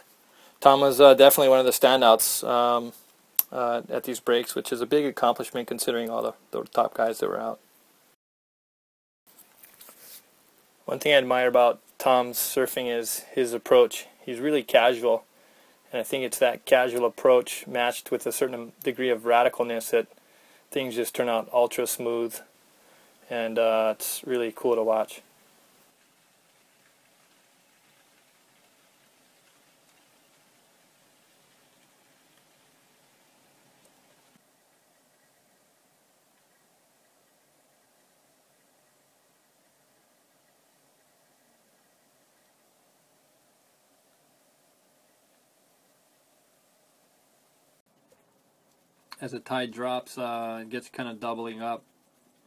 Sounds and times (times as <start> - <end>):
Speech: 0.6 - 7.6, 10.9 - 15.3, 15.9 - 22.5, 23.3 - 25.3, 49.2 - 51.9.